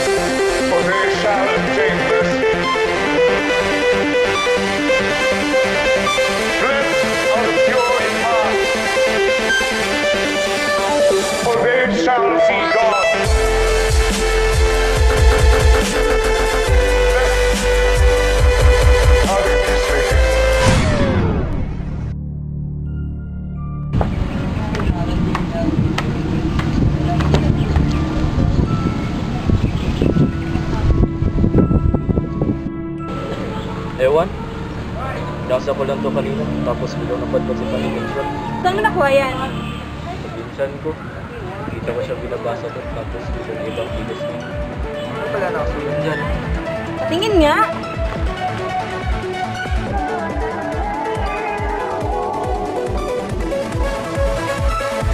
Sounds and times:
Dubstep: 12.6s - 21.6s.

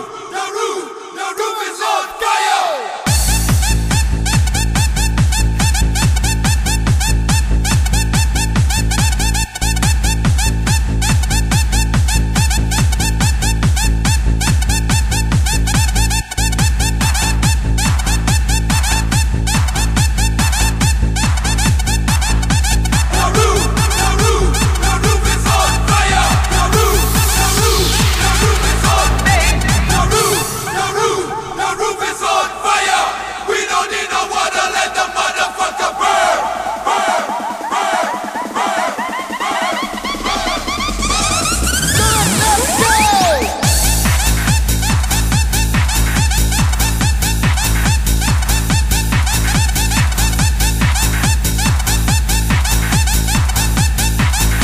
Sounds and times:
Techno: 1.8s - 54.6s.

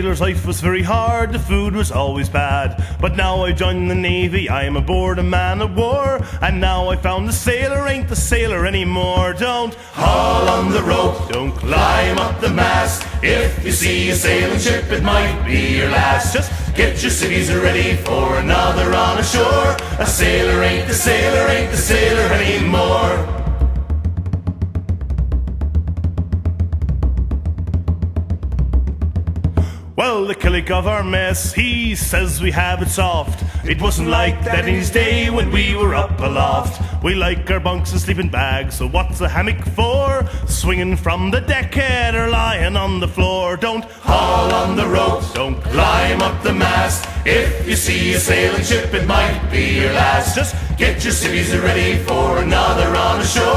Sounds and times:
Music: 0.0s - 53.5s.

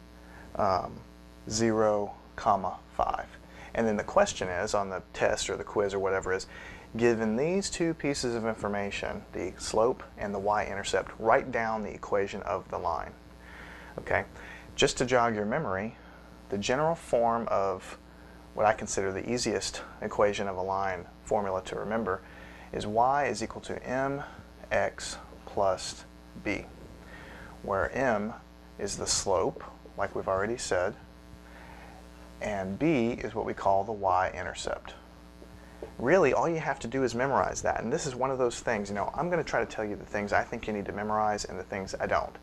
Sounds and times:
Speech: 0.5s - 13.2s, 14.0s - 18.0s, 18.6s - 26.8s, 27.6s - 31.0s, 32.4s - 35.0s, 36.0s - 42.4s.

